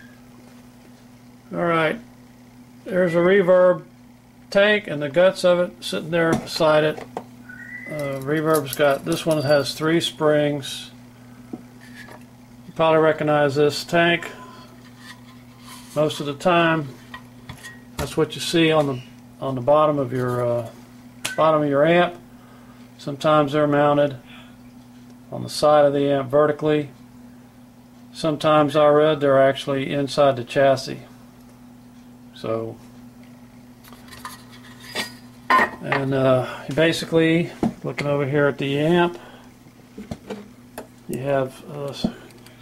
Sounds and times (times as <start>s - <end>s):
Speech: 1.5s - 2.0s, 2.8s - 3.9s, 4.5s - 7.0s, 7.9s - 11.0s, 12.8s - 14.5s, 16.0s - 17.0s, 18.0s - 20.8s, 21.4s - 22.2s, 23.0s - 24.3s, 25.3s - 27.0s, 28.1s - 31.2s, 32.3s - 32.8s, 35.8s - 39.2s, 41.1s - 42.3s.